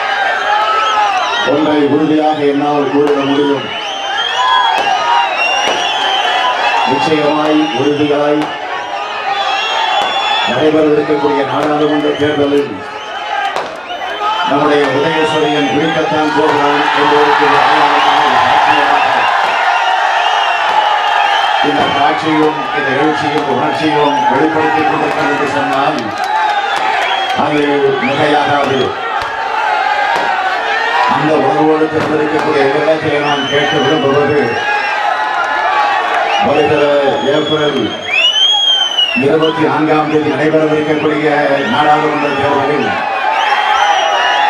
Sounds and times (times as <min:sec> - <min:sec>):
Male speech, man speaking: 0:01.4 - 0:03.7, 0:06.9 - 0:08.5, 0:10.5 - 0:12.8, 0:14.4 - 0:19.3, 0:21.6 - 0:26.2, 0:27.4 - 0:28.9, 0:31.1 - 0:34.6, 0:36.4 - 0:38.0, 0:39.2 - 0:43.0
Narration, monologue: 0:14.4 - 0:19.2, 0:21.6 - 0:26.2, 0:31.1 - 0:34.6.